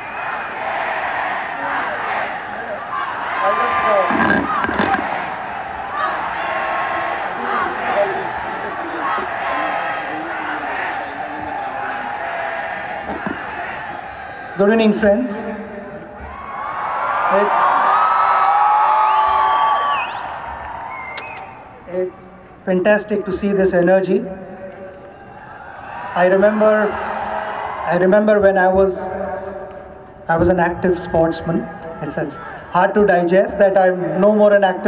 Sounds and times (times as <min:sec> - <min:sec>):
Male speech, man speaking: 0:03.4 - 0:04.1, 0:14.6 - 0:15.6, 0:17.3 - 0:17.8, 0:21.9 - 0:24.3, 0:26.2 - 0:27.0, 0:27.9 - 0:29.3, 0:30.3 - 0:34.8
Narration, monologue: 0:14.6 - 0:16.0, 0:21.8 - 0:24.9, 0:26.2 - 0:27.1, 0:27.8 - 0:34.8.